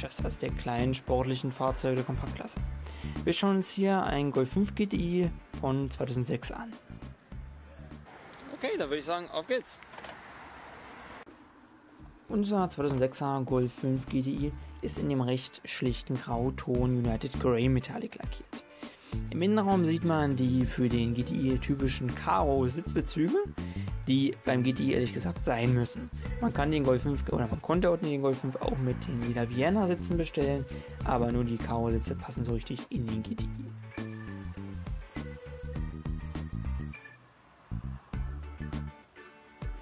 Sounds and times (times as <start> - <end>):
Speech: 0.0 - 2.6, 3.2 - 6.8, 8.4 - 9.8, 12.3 - 18.6, 19.3 - 23.5, 24.1 - 33.7
Music: 0.0 - 8.1, 12.0 - 39.8.